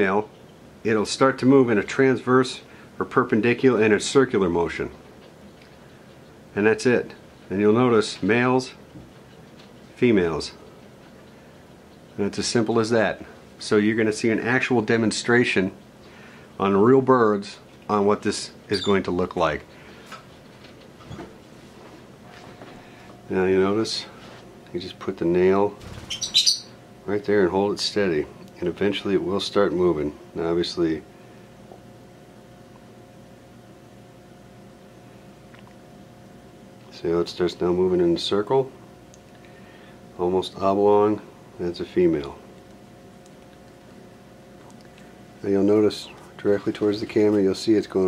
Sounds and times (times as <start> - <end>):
Speech: 0.0 - 5.0, 6.5 - 8.8, 10.0 - 10.6, 12.2 - 15.8, 16.6 - 19.7, 23.3 - 25.8, 27.0 - 31.1, 36.9 - 38.8, 40.2 - 42.4, 45.4 - 48.0
Bird: 18.7 - 19.2, 25.8 - 26.8.